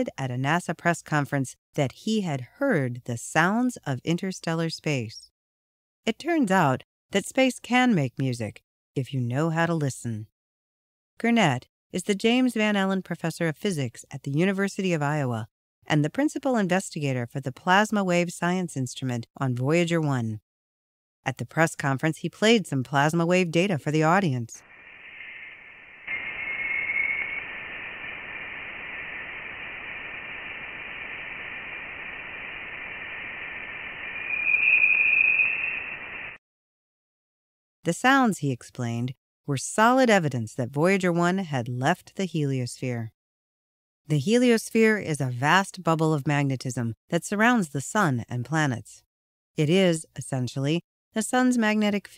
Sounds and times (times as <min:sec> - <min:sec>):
Speech: 0:00.0 - 0:05.3, 0:06.1 - 0:10.3, 0:11.2 - 0:20.4, 0:21.3 - 0:24.6, 0:37.8 - 0:43.2, 0:44.1 - 0:49.0, 0:49.6 - 0:52.1.